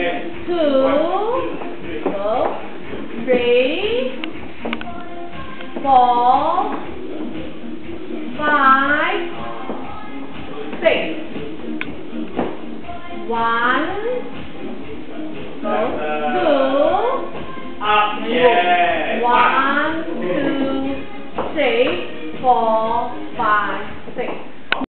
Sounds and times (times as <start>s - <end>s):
Music: 0.0s - 24.9s
Speech: 17.8s - 21.0s.